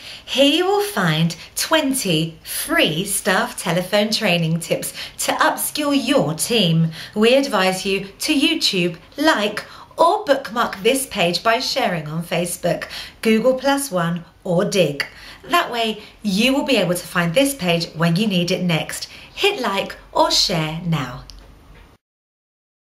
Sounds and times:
Speech: 0:00.3 - 0:21.4.

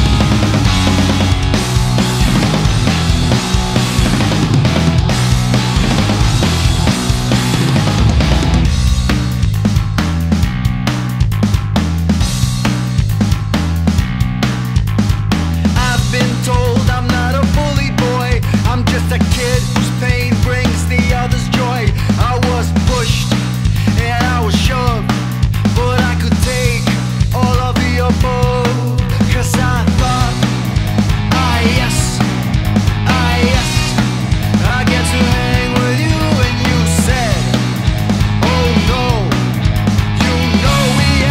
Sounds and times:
Music: 0:00.0 - 0:41.3.

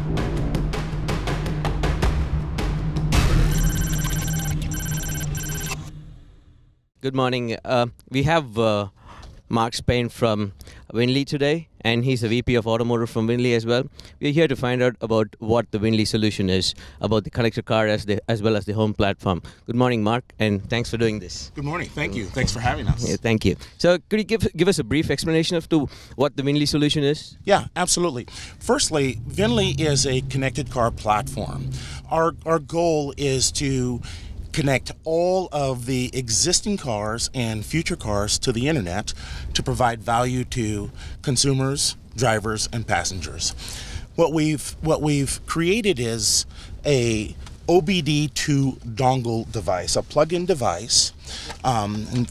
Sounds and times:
Speech: 0:07.0 - 0:43.5, 0:44.2 - 0:52.3.

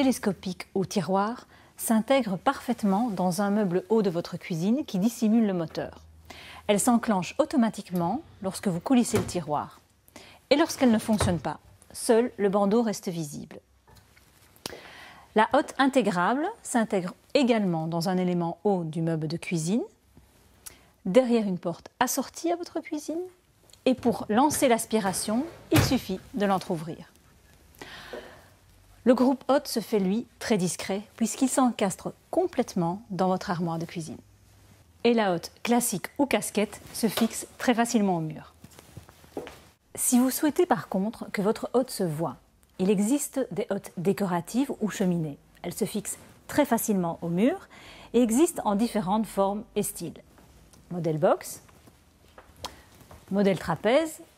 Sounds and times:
Speech: 0:00.0 - 0:06.0, 0:06.7 - 0:09.8, 0:10.5 - 0:13.6, 0:15.4 - 0:20.0, 0:21.0 - 0:27.1, 0:29.0 - 0:34.2, 0:35.0 - 0:38.6, 0:40.0 - 0:50.2, 0:50.9 - 0:51.7, 0:53.3 - 0:54.3.

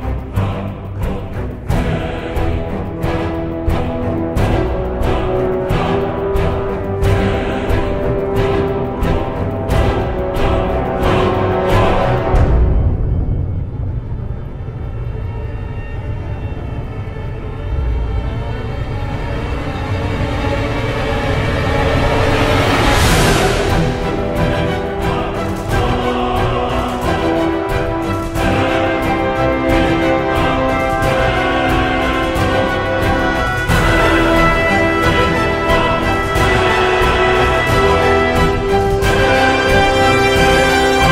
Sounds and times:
Scary music: 0:00.0 - 0:41.1.

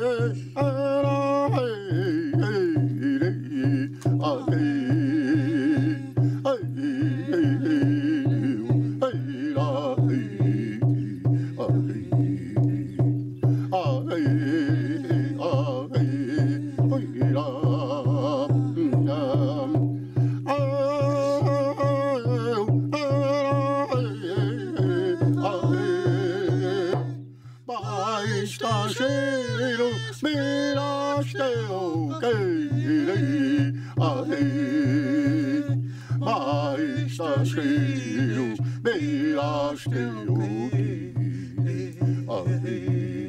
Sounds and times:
Music: 0:00.0 - 0:43.2.

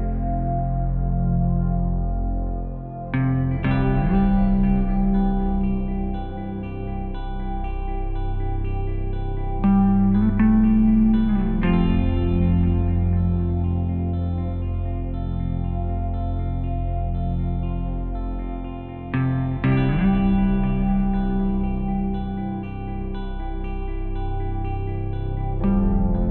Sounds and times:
Effects unit: 0:00.0 - 0:26.3
Music: 0:00.0 - 0:26.3.

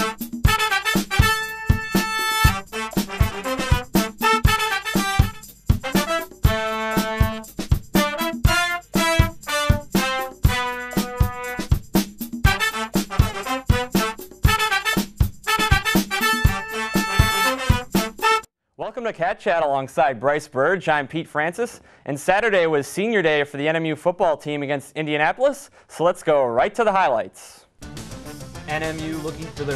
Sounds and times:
Music: 0:00.0 - 0:18.5, 0:27.8 - 0:29.7
Speech: 0:18.8 - 0:27.7, 0:28.7 - 0:29.7.

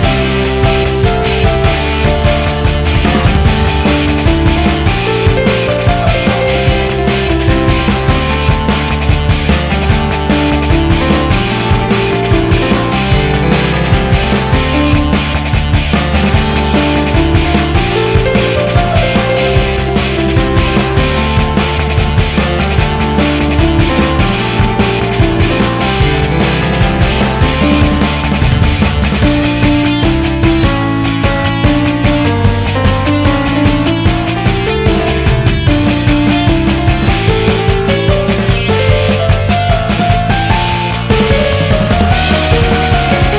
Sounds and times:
Rhythm and blues: 0:00.0 - 0:43.3.

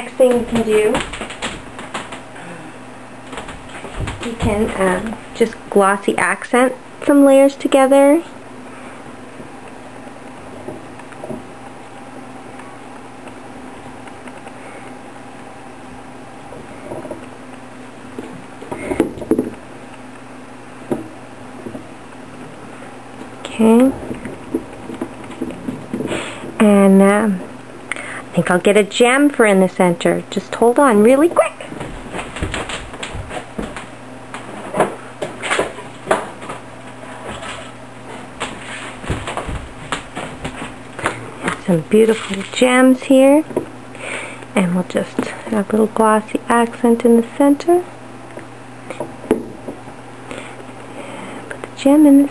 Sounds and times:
Speech: 0:00.0 - 0:01.0, 0:04.2 - 0:08.3, 0:23.4 - 0:24.0, 0:26.6 - 0:27.4, 0:28.3 - 0:31.7, 0:41.6 - 0:43.5, 0:44.6 - 0:47.9, 0:51.8 - 0:52.3
Inside, small room: 0:00.0 - 0:52.3.

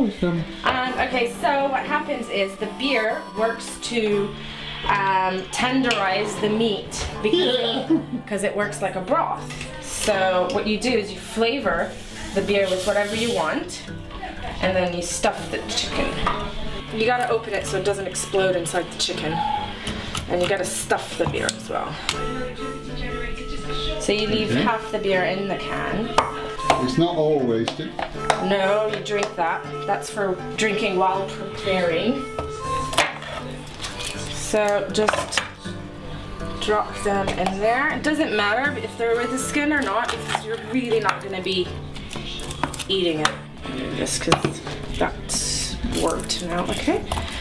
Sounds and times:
Music: 0:00.0 - 0:47.4.

